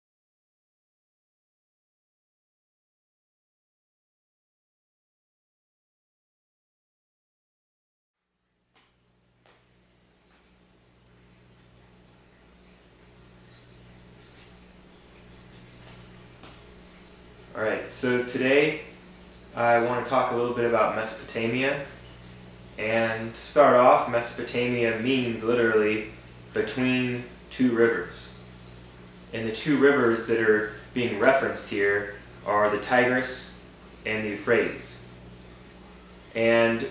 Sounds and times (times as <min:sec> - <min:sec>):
Speech: 0:17.6 - 0:18.9, 0:19.6 - 0:22.0, 0:22.8 - 0:28.4, 0:29.3 - 0:35.1, 0:36.4 - 0:36.9.